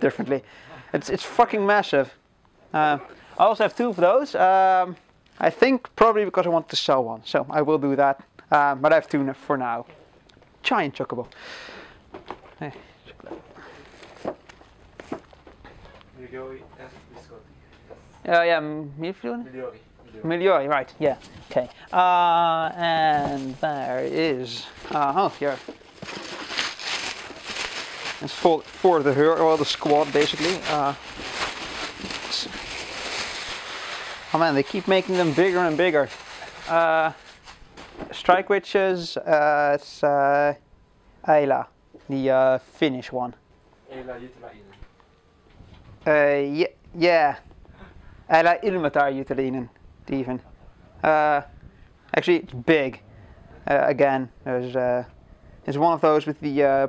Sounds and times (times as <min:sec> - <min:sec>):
Speech: 0:00.0 - 0:02.2, 0:02.8 - 0:09.9, 0:10.6 - 0:11.3, 0:18.2 - 0:25.6, 0:28.2 - 0:31.0, 0:34.3 - 0:36.1, 0:36.7 - 0:37.2, 0:38.1 - 0:40.6, 0:41.3 - 0:44.8, 0:46.0 - 0:47.4, 0:48.3 - 0:51.5, 0:52.1 - 0:53.0, 0:53.6 - 0:55.1, 0:55.7 - 0:56.8.